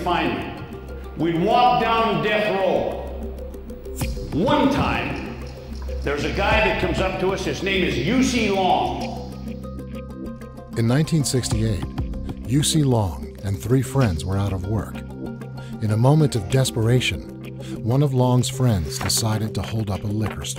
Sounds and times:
Speech: 0.0s - 0.6s, 1.2s - 3.0s, 4.4s - 5.3s, 6.1s - 9.2s, 10.8s - 11.9s, 12.5s - 15.0s, 15.8s - 20.5s
Music: 0.0s - 20.5s.

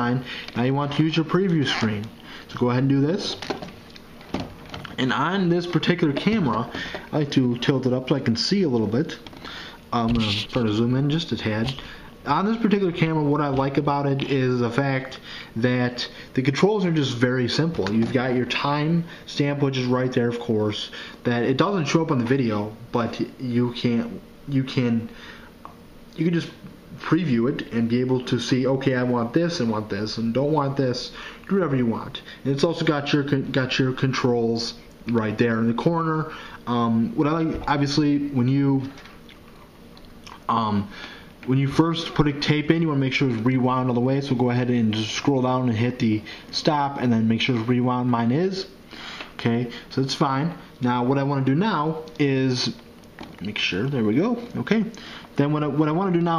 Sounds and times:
Speech: 0.0s - 3.6s, 5.0s - 9.3s, 9.9s - 25.2s, 26.2s - 39.0s, 40.3s - 48.8s, 49.4s - 52.8s, 53.4s - 56.3s.

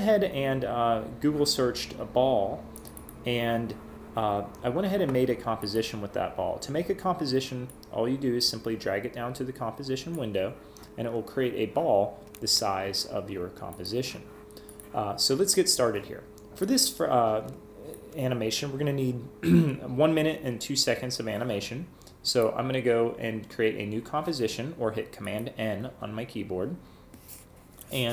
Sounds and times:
Speech: 0.0s - 2.6s, 3.3s - 14.3s, 15.0s - 26.8s, 27.9s - 28.1s.

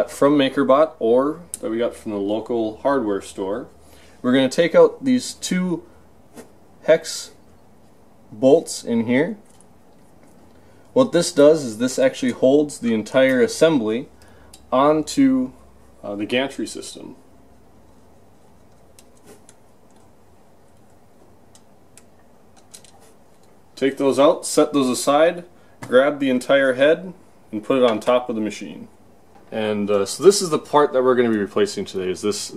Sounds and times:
Speech: 0.0s - 5.9s, 6.8s - 7.4s, 8.3s - 9.4s, 11.0s - 14.1s, 14.7s - 17.2s, 23.8s - 32.5s.

